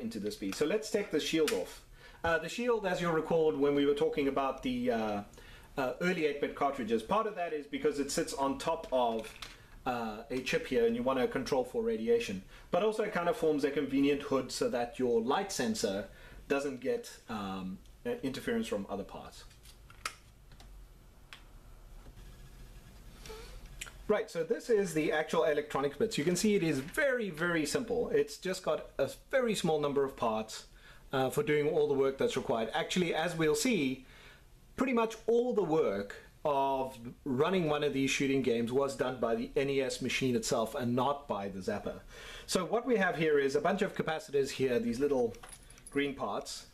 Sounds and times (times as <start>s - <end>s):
Speech: 0.0s - 19.5s, 23.8s - 34.0s, 34.8s - 46.7s
Inside, small room: 0.0s - 46.7s.